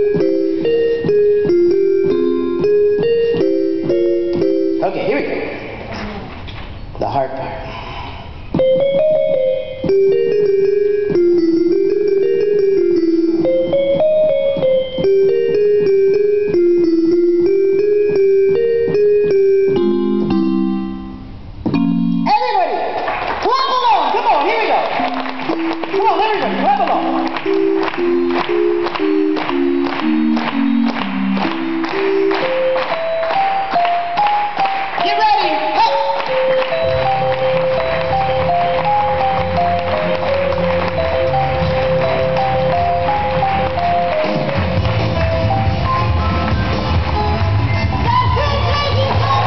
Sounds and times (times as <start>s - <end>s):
Music: 0.0s - 5.7s, 8.6s - 22.6s, 24.8s - 49.4s.